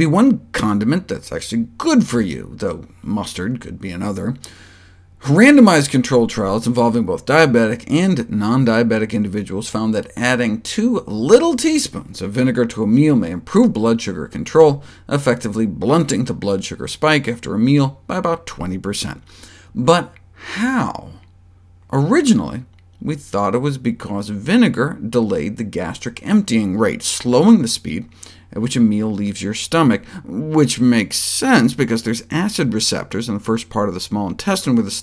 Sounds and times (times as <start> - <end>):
Speech: 0.0 - 4.4, 5.2 - 21.3, 21.9 - 35.0.